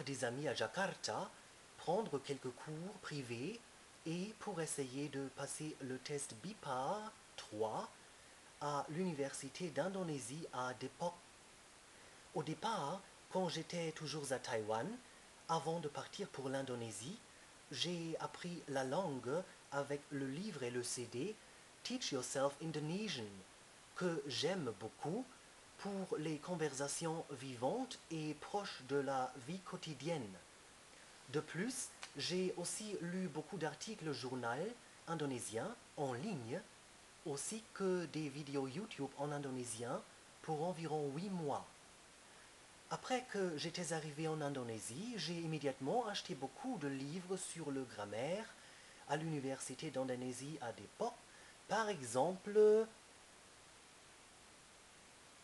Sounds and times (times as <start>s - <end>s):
Speech: 0.0s - 8.0s, 8.6s - 11.2s, 12.3s - 30.5s, 31.3s - 41.8s, 42.9s - 53.0s.